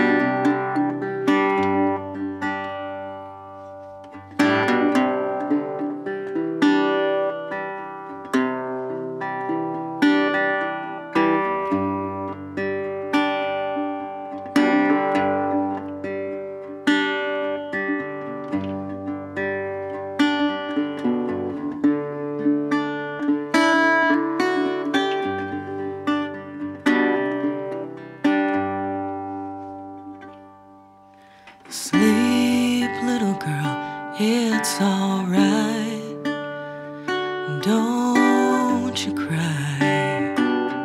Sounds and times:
Music: 0.0s - 40.8s.

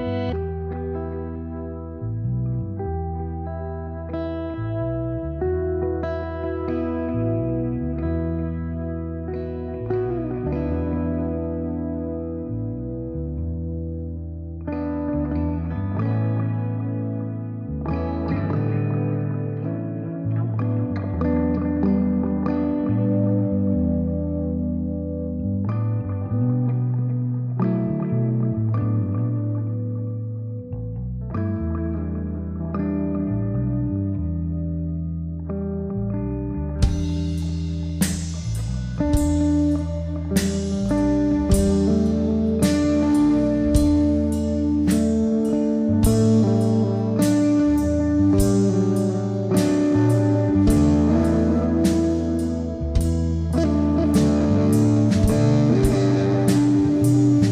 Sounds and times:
Music: 0.0s - 57.5s.

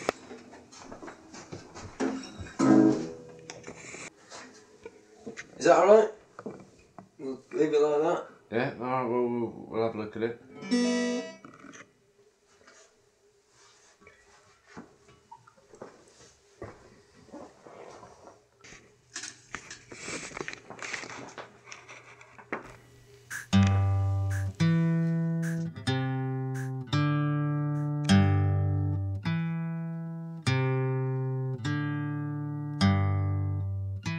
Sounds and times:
Inside, small room: 0.0s - 34.1s
Music: 10.6s - 11.4s, 23.2s - 34.1s.

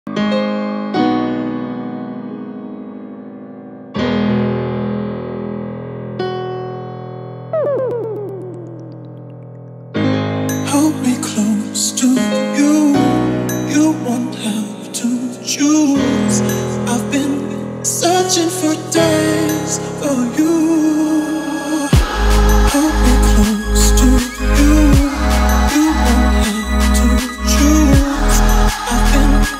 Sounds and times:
Piano: 0.1s - 29.5s.

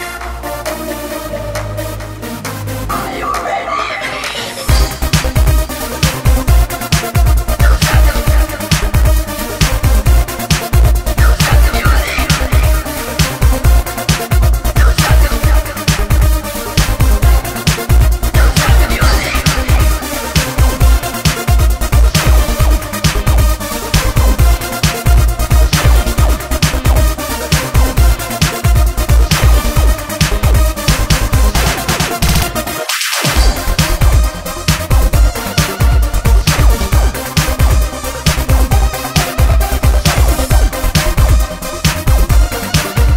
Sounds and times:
Music: 0.0s - 43.1s.

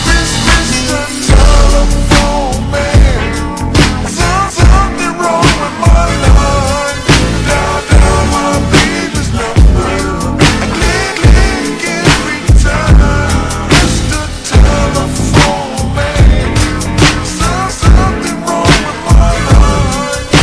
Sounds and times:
Music: 0.0s - 20.4s.

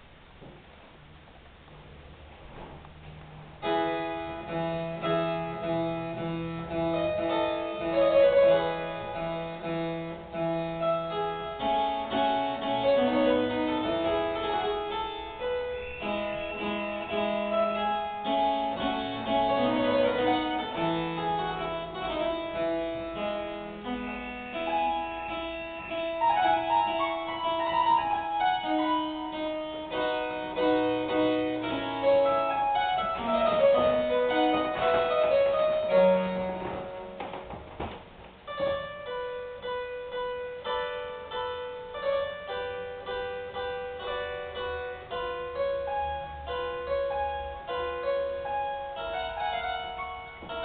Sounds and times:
Piano: 0.0s - 50.6s.

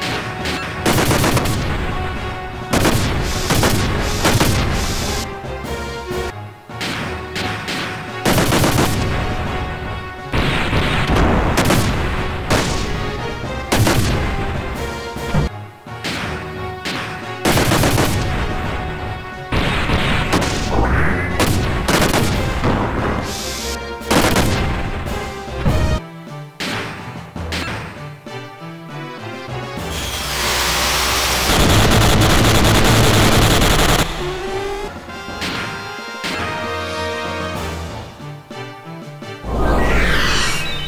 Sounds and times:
Fusillade: 0.0s - 1.9s, 2.7s - 5.2s, 6.8s - 9.5s, 10.3s - 13.0s, 13.7s - 14.4s, 16.1s - 18.9s, 19.5s - 20.7s, 21.3s - 22.8s, 24.1s - 24.8s, 31.0s - 34.3s
Music: 0.0s - 40.8s.

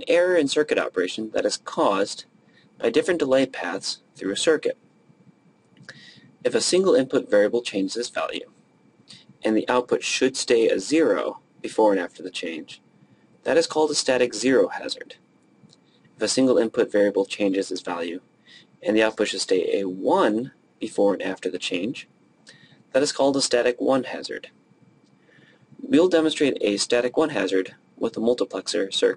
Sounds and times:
Speech: 0.0s - 4.8s, 6.4s - 8.5s, 9.4s - 12.8s, 13.4s - 15.2s, 16.2s - 18.2s, 18.8s - 22.1s, 22.9s - 24.6s, 25.8s - 29.1s.

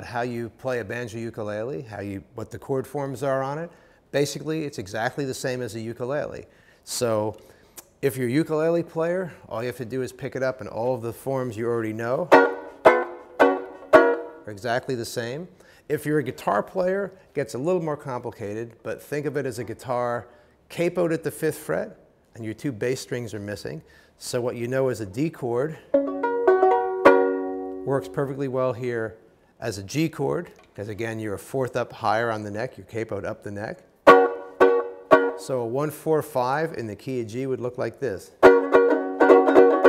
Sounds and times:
Speech: 0.0s - 12.3s, 14.5s - 25.8s, 27.8s - 33.9s, 35.4s - 38.4s.

